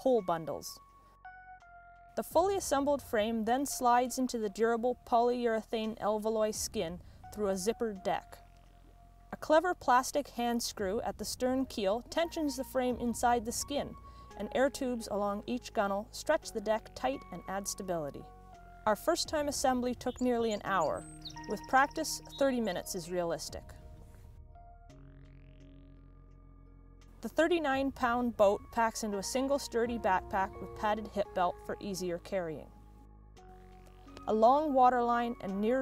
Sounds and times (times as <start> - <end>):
Speech: 0.0 - 0.8, 2.2 - 8.4, 9.4 - 18.3, 18.9 - 23.8, 27.2 - 32.7, 34.3 - 35.8
Music: 0.0 - 35.8.